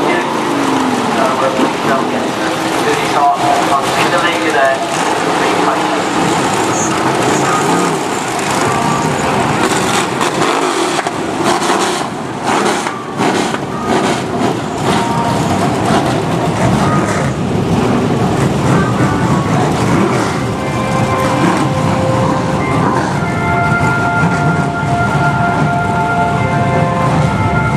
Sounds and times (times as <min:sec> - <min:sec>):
Vehicle: 0:00.0 - 0:27.7.